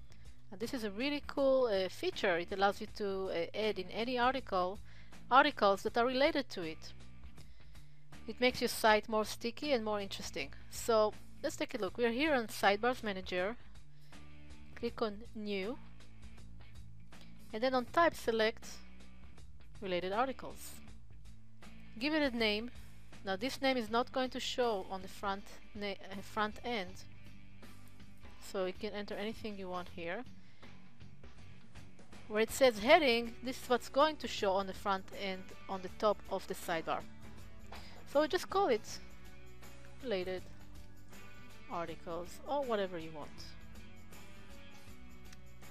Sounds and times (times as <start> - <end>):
Speech: 0.6 - 6.9, 8.3 - 13.6, 14.8 - 15.8, 17.5 - 18.8, 19.8 - 20.8, 22.0 - 27.0, 28.4 - 30.2, 32.3 - 37.0, 38.1 - 39.0, 40.0 - 40.4, 41.7 - 43.5.